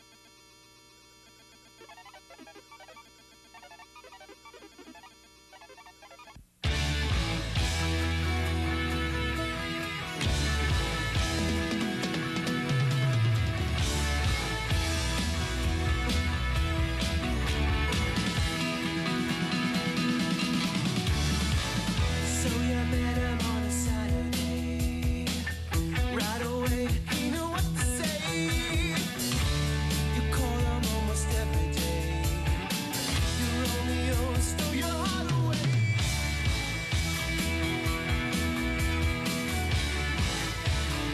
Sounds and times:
Music: 6.6 - 41.1.

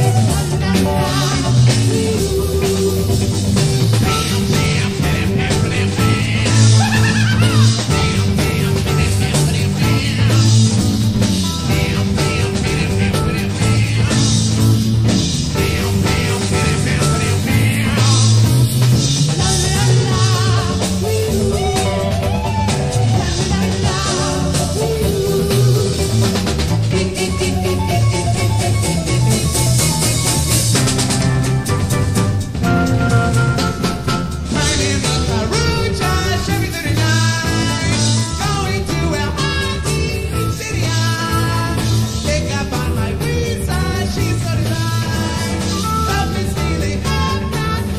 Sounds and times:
Music: 0.0 - 47.9.

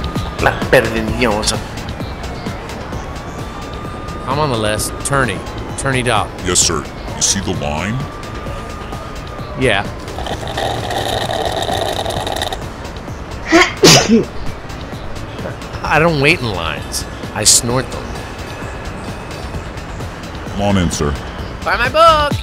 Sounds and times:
Music: 0.0 - 22.4.

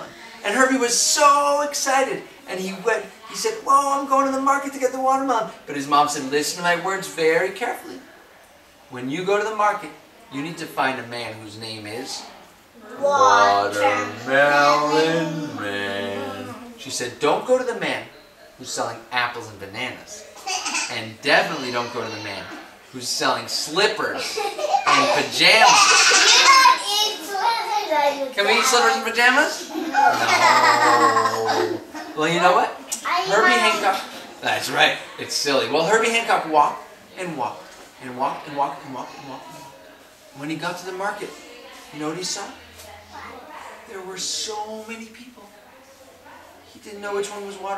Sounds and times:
Inside, small room: 0.0 - 47.7
Child speech, kid speaking: 12.8 - 16.8, 20.4 - 22.7, 24.4 - 31.8, 32.9 - 34.2, 42.9 - 43.8.

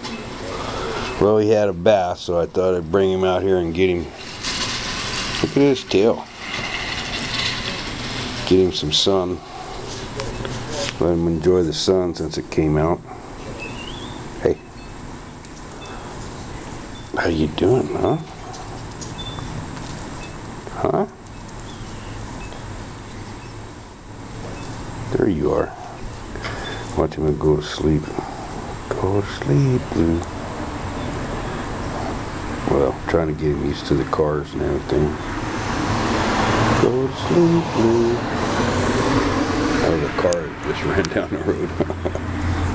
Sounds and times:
Outside, urban or manmade: 0.0 - 42.7
Speech: 1.2 - 4.1, 5.4 - 6.3, 8.4 - 9.5, 10.2 - 13.1, 14.4 - 14.6, 17.2 - 18.3, 20.7 - 21.2, 25.1 - 25.9, 27.0 - 28.2, 28.9 - 30.3, 32.6 - 35.2, 36.8 - 38.2, 39.8 - 41.9.

